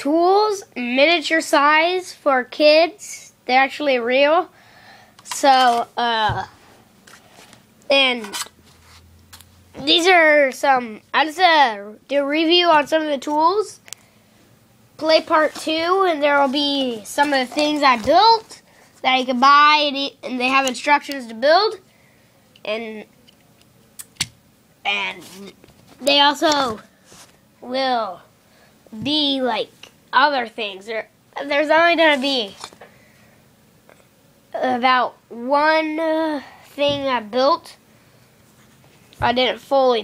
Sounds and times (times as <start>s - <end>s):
Speech: 0.0s - 4.5s, 5.3s - 6.5s, 7.9s - 8.4s, 9.8s - 13.8s, 15.0s - 21.8s, 22.6s - 23.1s, 24.9s - 26.8s, 27.6s - 28.2s, 28.9s - 32.6s, 34.5s - 37.8s, 39.2s - 40.0s.